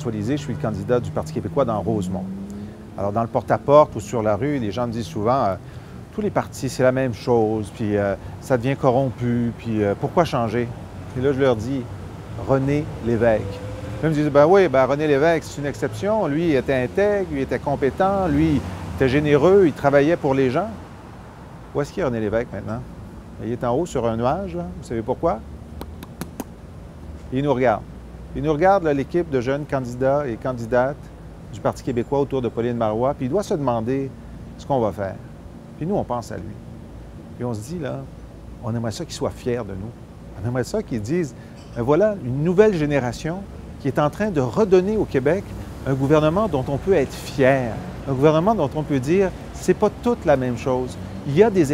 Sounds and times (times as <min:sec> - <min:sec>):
Speech: 0:00.0 - 0:02.3, 0:03.0 - 0:20.8, 0:21.8 - 0:25.4, 0:27.3 - 0:35.2, 0:35.8 - 0:36.6, 0:37.4 - 0:51.7.